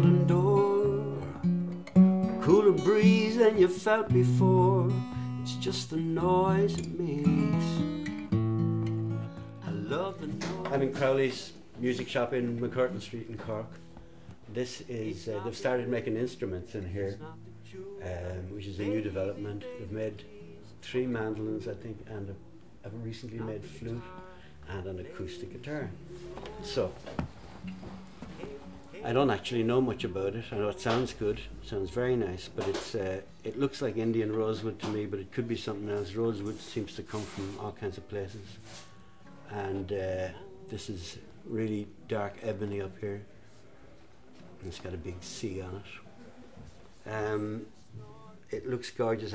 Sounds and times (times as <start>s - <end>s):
Music: 0.0s - 49.3s
Speech: 9.7s - 13.8s, 14.5s - 17.4s, 18.0s - 27.0s, 28.4s - 38.6s, 39.5s - 43.3s, 44.4s - 46.4s, 47.0s - 49.3s.